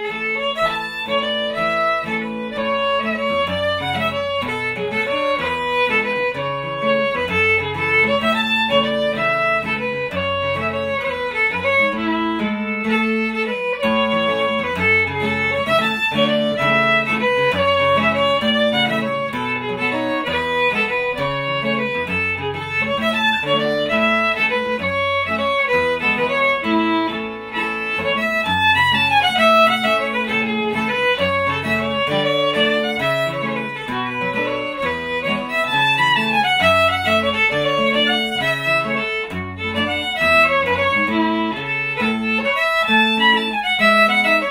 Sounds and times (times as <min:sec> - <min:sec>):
Violin, fiddle: 0:00.0 - 0:44.5.